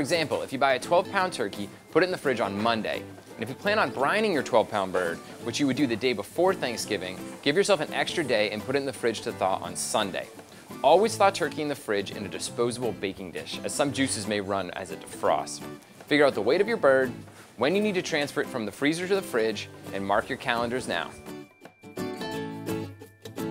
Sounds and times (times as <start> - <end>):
Speech: 0.0 - 21.2
Music: 0.0 - 23.5.